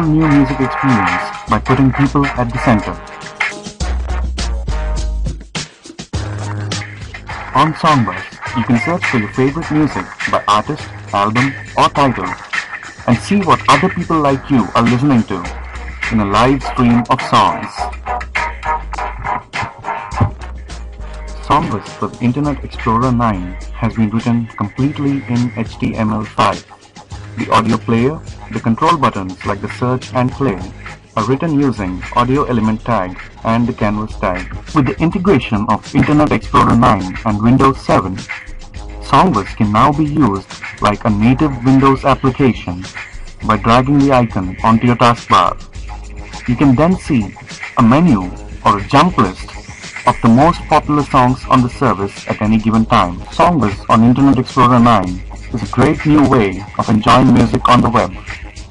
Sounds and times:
Speech synthesizer: 0:00.0 - 0:03.0, 0:07.6 - 0:12.4, 0:13.1 - 0:17.9, 0:21.4 - 0:26.6, 0:27.4 - 0:38.2, 0:39.0 - 0:42.9, 0:43.5 - 0:45.6, 0:46.5 - 0:49.5, 0:50.1 - 0:58.2
Music: 0:00.0 - 0:58.7.

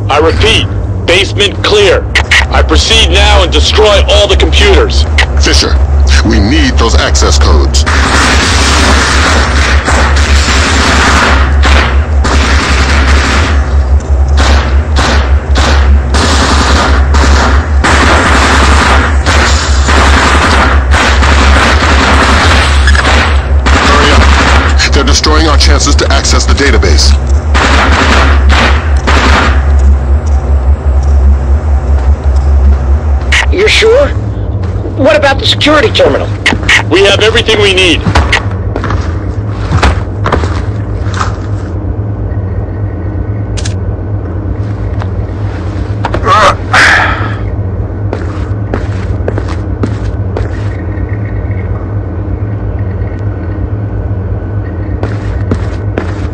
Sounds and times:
Speech: 0:00.1 - 0:07.8, 0:24.8 - 0:27.2, 0:33.4 - 0:34.2, 0:34.8 - 0:38.1.

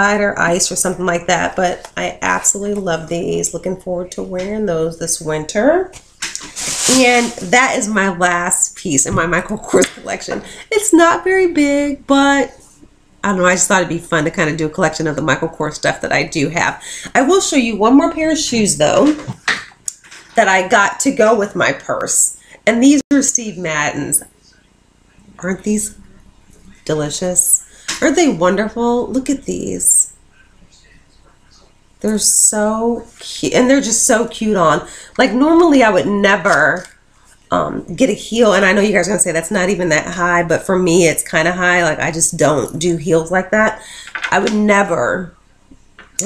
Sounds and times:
Speech: 0:00.0 - 0:12.6, 0:13.2 - 0:19.5, 0:20.1 - 0:24.6, 0:25.2 - 0:36.9, 0:37.5 - 0:45.3
Inside, small room: 0:00.0 - 0:46.2.

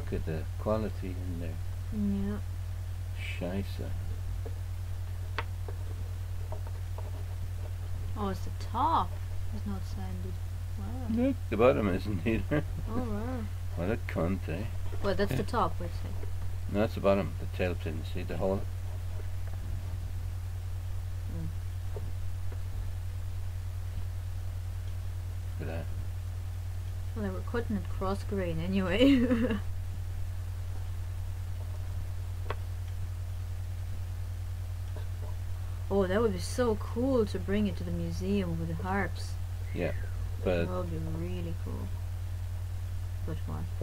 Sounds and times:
Speech: 0:00.0 - 0:02.4, 0:08.2 - 0:16.1, 0:27.2 - 0:29.6, 0:35.9 - 0:41.9, 0:43.3 - 0:43.8.

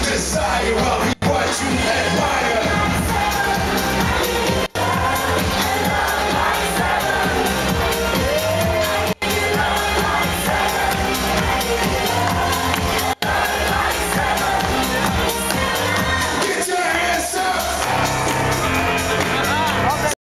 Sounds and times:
Music: 0:00.0 - 0:20.2
Speech: 0:19.2 - 0:20.2.

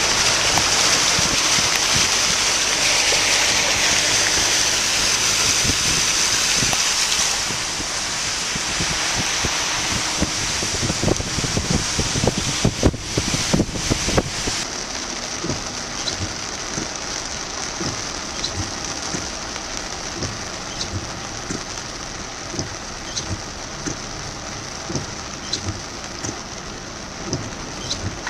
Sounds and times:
Rain on surface: 0:00.0 - 0:28.2.

